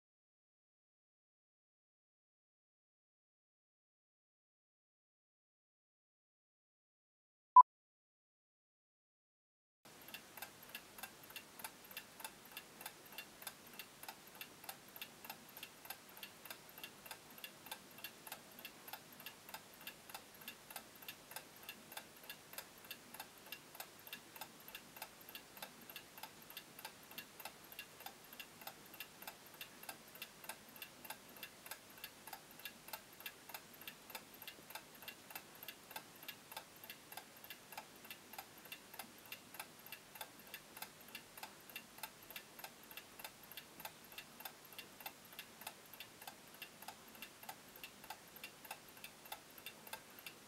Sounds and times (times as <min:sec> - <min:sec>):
Tick-tock: 0:09.9 - 0:50.4.